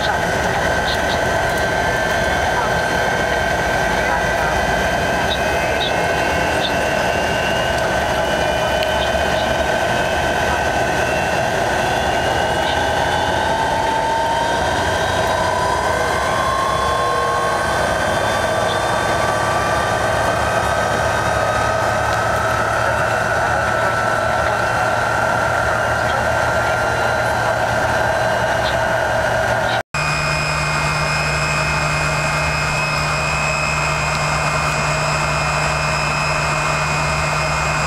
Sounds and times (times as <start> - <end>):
Heavy engine (low frequency): 0.0 - 37.8
Idling: 0.0 - 37.8
Vehicle: 0.0 - 37.8.